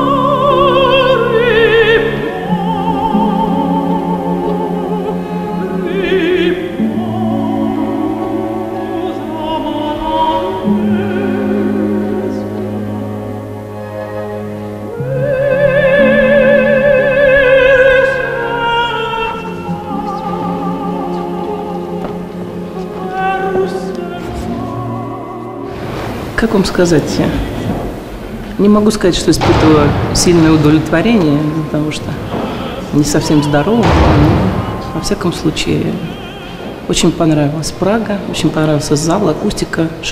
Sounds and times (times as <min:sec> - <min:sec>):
Opera: 0:00.0 - 0:40.1
Orchestra: 0:00.0 - 0:40.1.